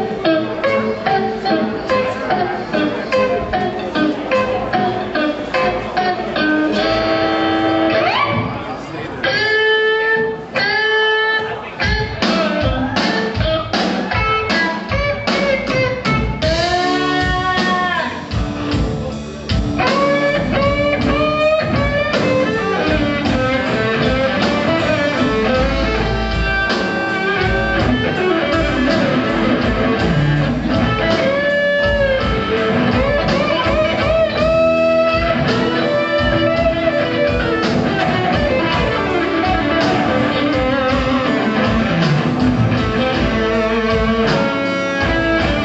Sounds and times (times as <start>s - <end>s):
Heavy metal: 0.0s - 45.6s
Progressive rock: 0.0s - 45.6s
Rock and roll: 0.0s - 45.6s
Punk rock: 11.9s - 45.6s.